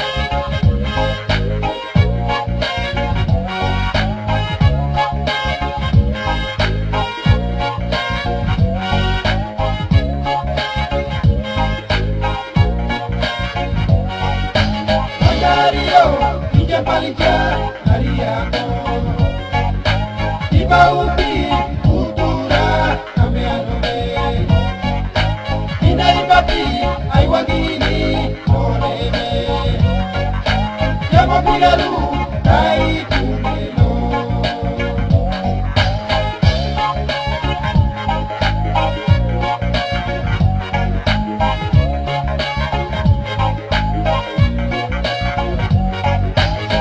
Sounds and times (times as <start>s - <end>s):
Music: 0.0s - 46.8s.